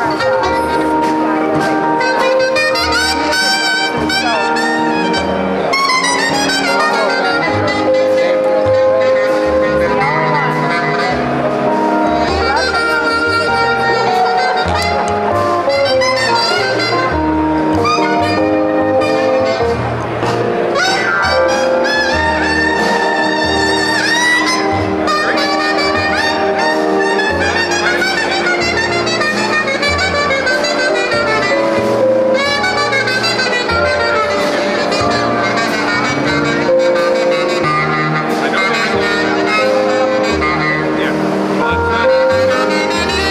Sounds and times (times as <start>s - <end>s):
Speech: 0.0s - 11.3s, 11.9s - 15.1s, 38.3s - 42.5s
Music: 0.0s - 43.3s.